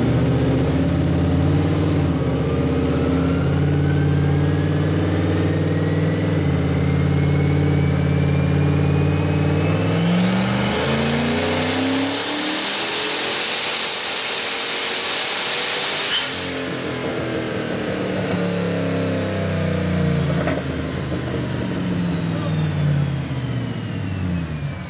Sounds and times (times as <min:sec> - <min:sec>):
Car: 0:00.0 - 0:24.8.